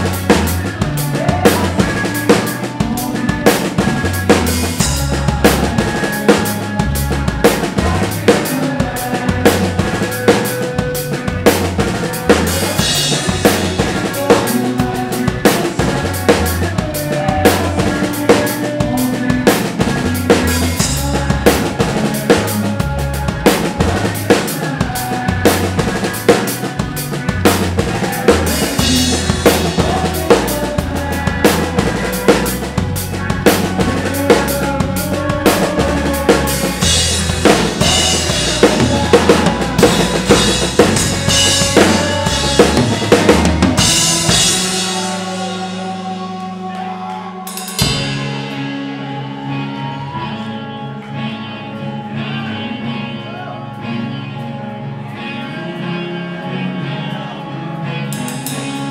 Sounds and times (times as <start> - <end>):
Bass drum: 0.0 - 26.2, 26.8 - 46.7
Drum roll: 0.0 - 46.6, 47.5 - 48.6
Drum kit: 0.0 - 50.0, 58.1 - 58.9.